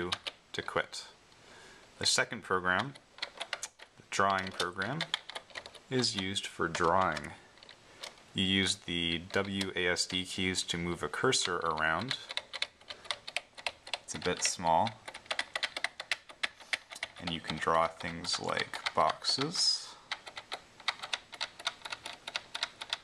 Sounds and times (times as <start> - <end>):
Computer keyboard: 0.0 - 0.4, 2.7 - 8.2, 9.2 - 23.0.